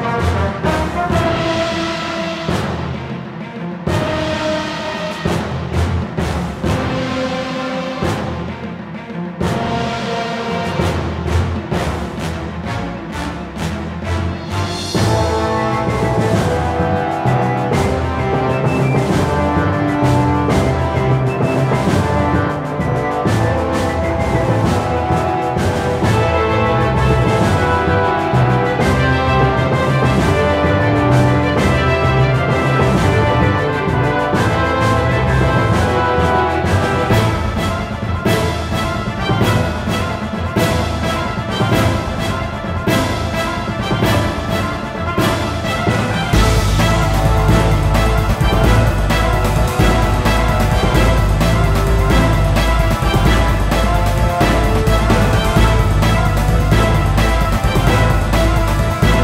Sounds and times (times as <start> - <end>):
Music: 0.0 - 59.2.